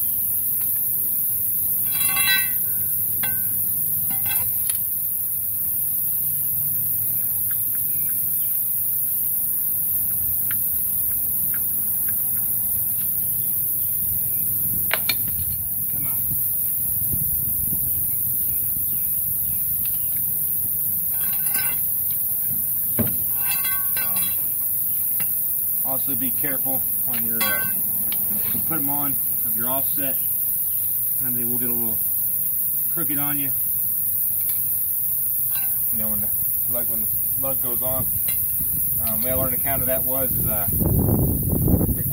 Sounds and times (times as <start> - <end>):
Speech: 25.8 - 27.8, 28.6 - 30.3, 31.2 - 32.0, 32.9 - 33.6, 35.9 - 38.1, 39.0 - 40.8.